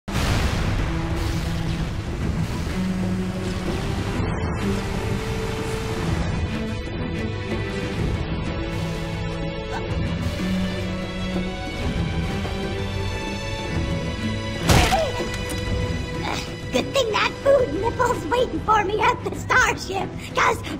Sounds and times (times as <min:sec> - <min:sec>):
Boom: 0:00.1 - 0:02.5
Music: 0:00.1 - 0:20.7.